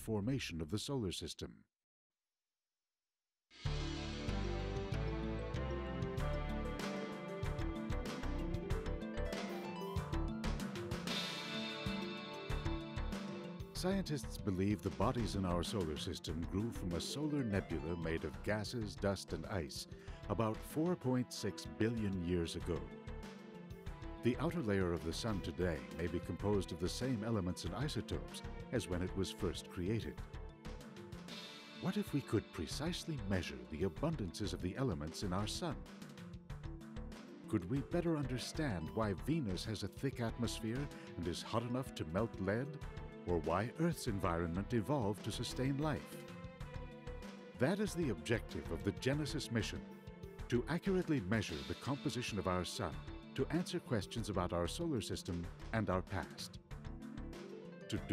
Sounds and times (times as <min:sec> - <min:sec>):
Speech: 0:00.0 - 0:01.7, 0:13.8 - 0:22.9, 0:24.2 - 0:30.2, 0:31.8 - 0:35.8, 0:37.5 - 0:46.1, 0:47.6 - 0:49.8, 0:50.5 - 0:56.6, 0:57.9 - 0:58.1
Music: 0:03.5 - 0:58.1.